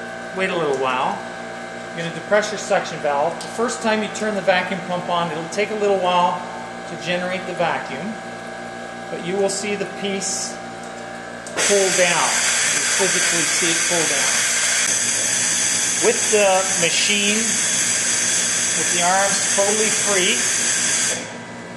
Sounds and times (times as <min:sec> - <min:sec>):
Speech: 0:00.4 - 0:01.2, 0:02.0 - 0:08.2, 0:09.1 - 0:10.6, 0:11.6 - 0:14.4, 0:16.0 - 0:17.6, 0:18.8 - 0:20.5.